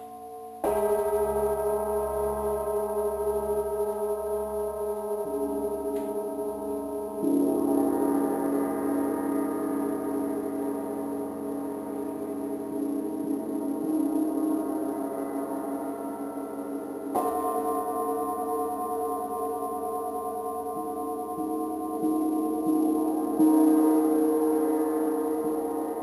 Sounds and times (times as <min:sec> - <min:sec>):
Gong: 0:00.0 - 0:26.0.